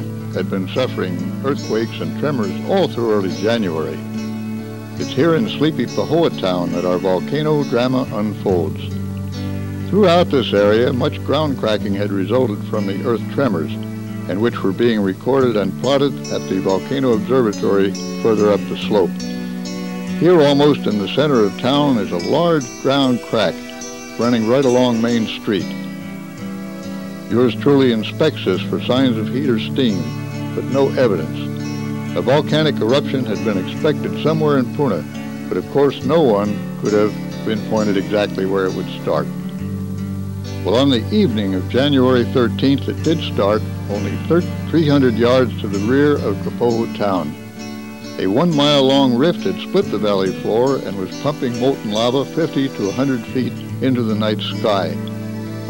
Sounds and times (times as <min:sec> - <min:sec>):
Speech: 0:00.0 - 0:04.0, 0:05.0 - 0:08.9, 0:09.9 - 0:19.2, 0:20.2 - 0:25.8, 0:27.3 - 0:31.5, 0:32.2 - 0:39.4, 0:40.6 - 0:47.4, 0:48.2 - 0:55.1
Music: 0:00.0 - 0:55.7.